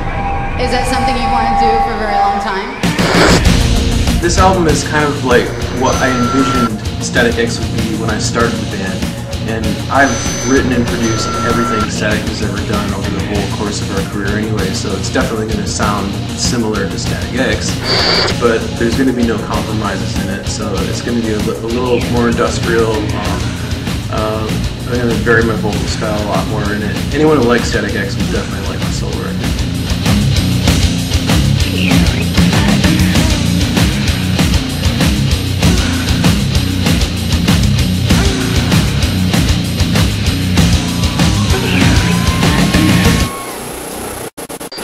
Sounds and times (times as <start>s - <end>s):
Speech: 0.6s - 2.7s, 4.2s - 17.8s, 18.4s - 23.5s, 24.1s - 29.4s, 31.7s - 33.6s.